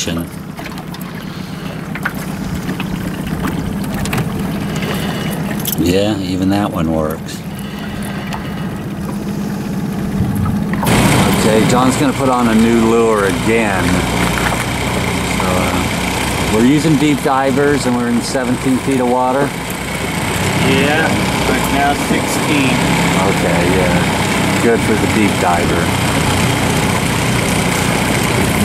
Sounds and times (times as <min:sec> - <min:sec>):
Speech: 0:00.0 - 0:00.3, 0:05.8 - 0:07.5, 0:11.3 - 0:14.1, 0:15.4 - 0:15.9, 0:16.5 - 0:19.5, 0:20.6 - 0:25.9.